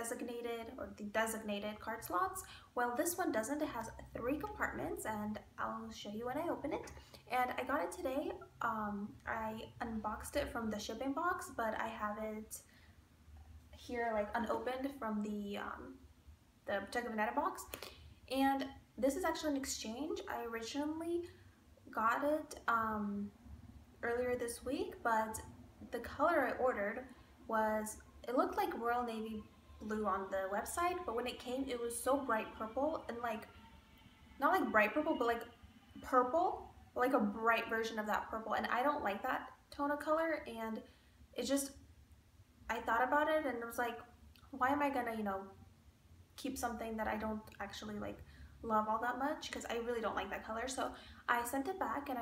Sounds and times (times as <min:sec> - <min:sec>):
Speech: 0:00.0 - 0:12.7, 0:13.8 - 0:16.0, 0:16.6 - 0:23.3, 0:24.0 - 0:33.6, 0:34.4 - 0:41.8, 0:42.7 - 0:45.6, 0:46.4 - 0:52.2.